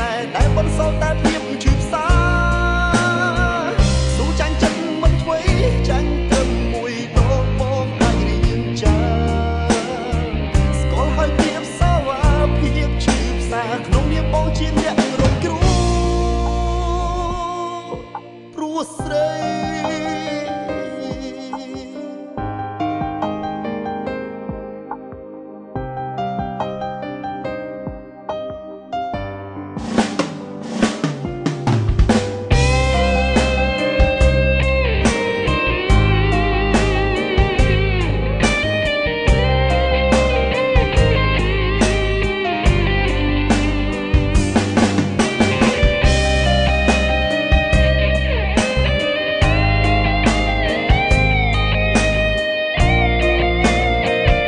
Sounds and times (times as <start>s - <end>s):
Music: 0.0s - 54.4s.